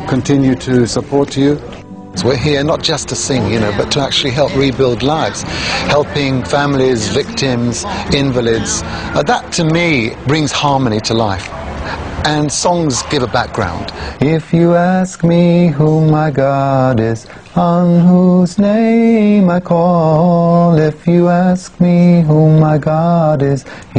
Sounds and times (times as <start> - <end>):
Music: 0.0 - 11.1
Speech: 0.0 - 11.5, 12.2 - 14.0.